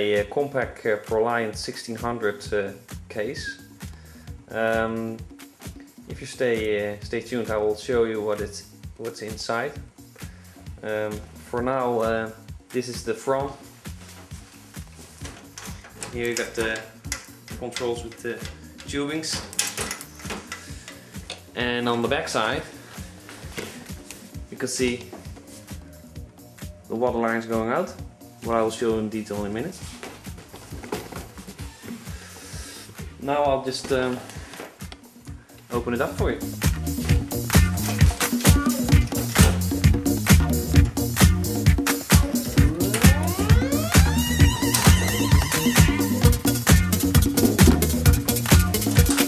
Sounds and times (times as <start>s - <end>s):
Speech: 0.0s - 3.6s, 4.5s - 5.2s, 6.1s - 9.8s, 10.8s - 13.6s, 16.0s - 19.5s, 21.6s - 22.7s, 24.5s - 25.2s, 26.9s - 30.0s, 33.2s - 34.3s, 35.7s - 36.5s
Music: 0.0s - 49.2s.